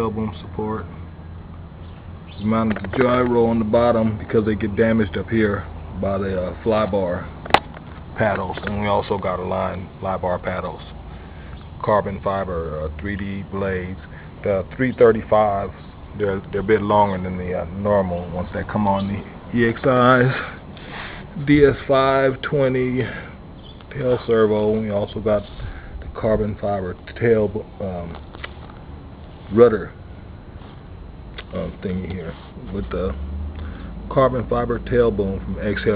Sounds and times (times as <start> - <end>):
Speech: 0.0 - 1.0, 2.4 - 7.4, 8.2 - 11.0, 11.8 - 20.6, 21.4 - 23.3, 23.9 - 28.2, 29.5 - 30.0, 31.4 - 33.2, 34.1 - 35.9.